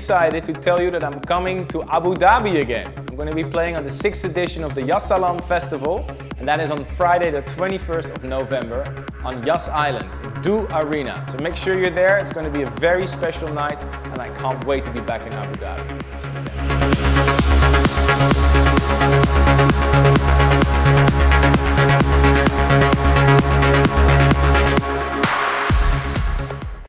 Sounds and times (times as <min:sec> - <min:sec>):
Music: 0:00.0 - 0:26.8.